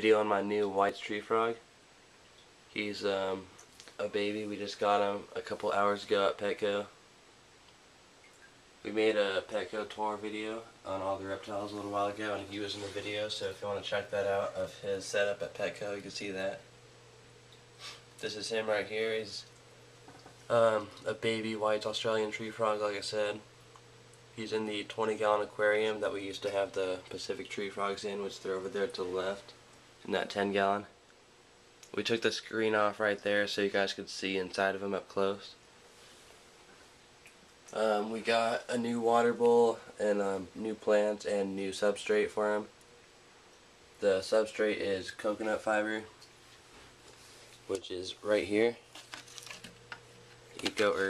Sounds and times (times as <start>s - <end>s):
Speech: 0.0s - 1.6s, 2.7s - 7.0s, 8.8s - 16.7s, 18.2s - 19.5s, 20.5s - 23.5s, 24.4s - 31.0s, 31.9s - 35.6s, 37.7s - 42.7s, 44.0s - 46.1s, 47.7s - 48.8s, 50.6s - 51.0s.